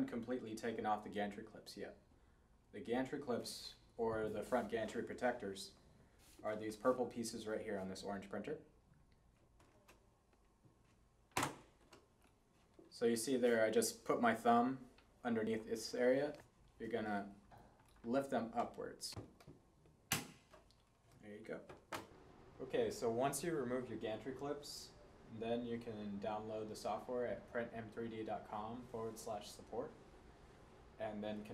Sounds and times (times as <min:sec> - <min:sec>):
Speech: 0:00.0 - 0:02.0, 0:02.7 - 0:05.8, 0:06.4 - 0:08.7, 0:12.9 - 0:17.4, 0:18.0 - 0:19.2, 0:21.2 - 0:21.7, 0:22.6 - 0:30.0, 0:31.0 - 0:31.5.